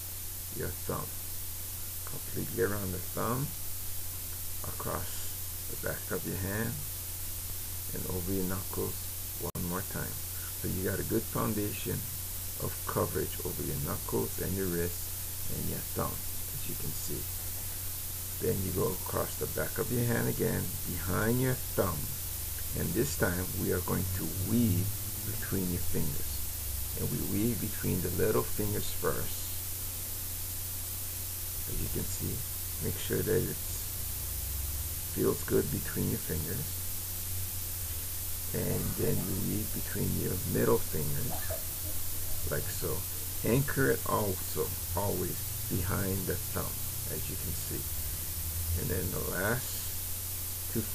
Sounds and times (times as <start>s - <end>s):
Speech: 0.5s - 1.1s, 2.0s - 3.6s, 4.6s - 6.9s, 7.9s - 17.3s, 18.4s - 29.6s, 31.6s - 33.8s, 35.1s - 36.8s, 38.5s - 41.7s, 42.4s - 47.9s, 48.8s - 50.0s, 50.7s - 50.9s.